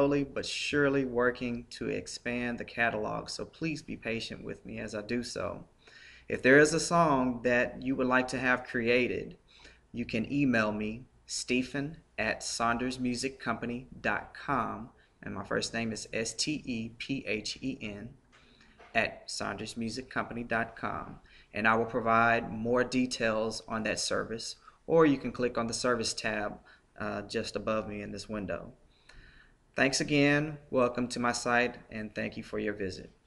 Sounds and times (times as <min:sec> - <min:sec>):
Speech: 0:00.0 - 0:05.7, 0:06.3 - 0:09.4, 0:10.0 - 0:18.2, 0:18.8 - 0:28.8, 0:29.8 - 0:33.2.